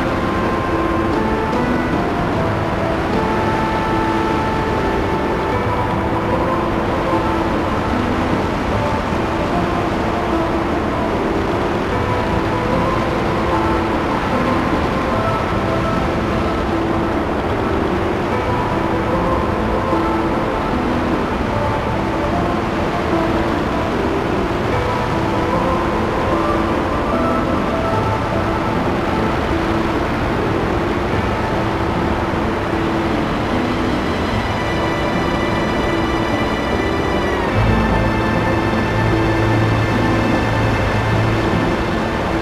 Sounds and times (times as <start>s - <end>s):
Music: 0.0s - 42.4s.